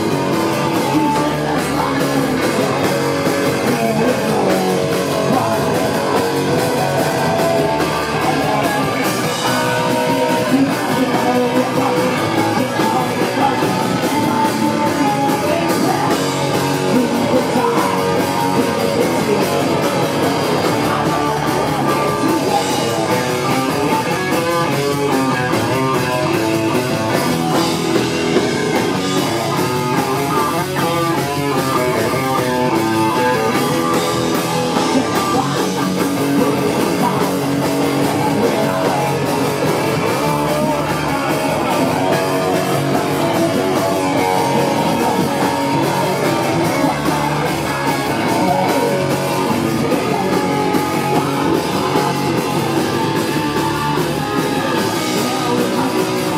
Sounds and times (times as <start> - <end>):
Guitar: 0.0 - 56.3
Rock music: 0.0 - 56.3.